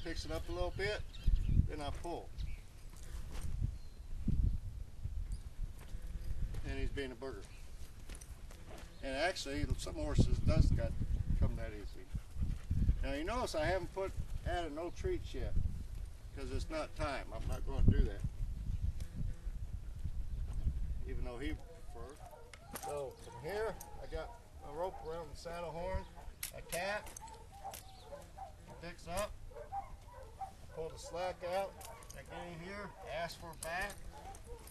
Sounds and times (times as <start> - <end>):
Outside, rural or natural: 0.0 - 34.7
Speech: 16.4 - 18.2, 21.1 - 22.2, 30.8 - 34.0.